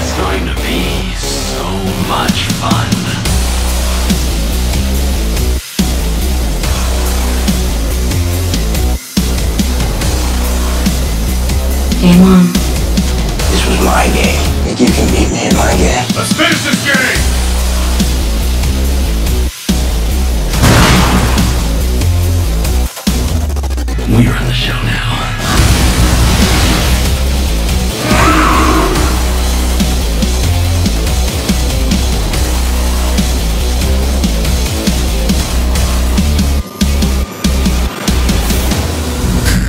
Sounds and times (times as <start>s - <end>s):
Music: 0.0s - 39.6s
Speech: 12.0s - 12.6s, 13.5s - 17.2s, 24.0s - 25.4s.